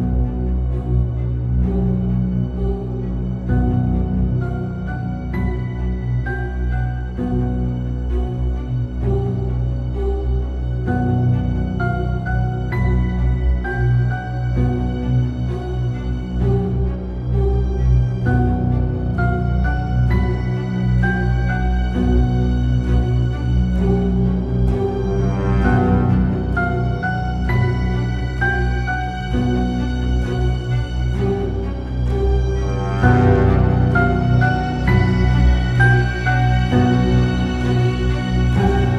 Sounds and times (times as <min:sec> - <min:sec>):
Keyboard (musical): 0:00.0 - 0:38.9.